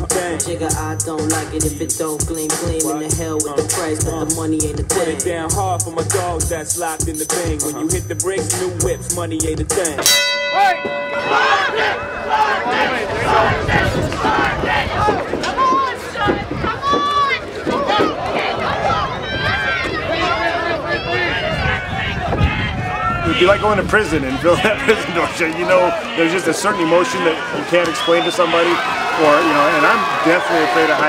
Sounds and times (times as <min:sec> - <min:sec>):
Speech: 0:23.3 - 0:31.0.